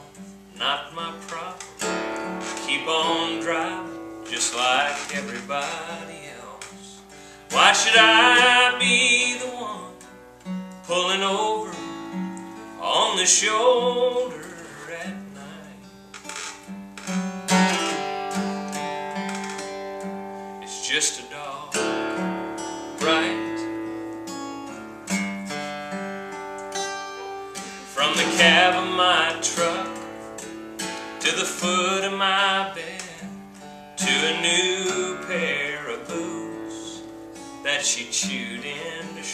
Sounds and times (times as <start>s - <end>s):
Strum: 0.0s - 39.3s
Speech: 20.7s - 21.7s.